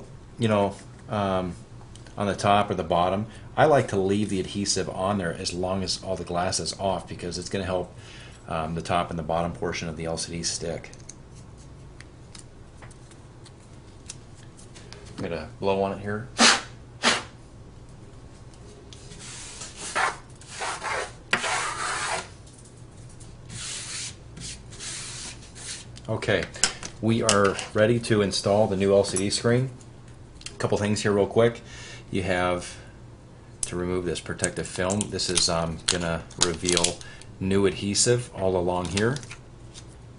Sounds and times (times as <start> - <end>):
Speech: 0.0 - 1.6, 2.2 - 7.9, 8.5 - 10.9, 15.2 - 16.3, 26.1 - 29.8, 30.6 - 32.8, 33.6 - 39.3
Inside, small room: 0.0 - 40.1.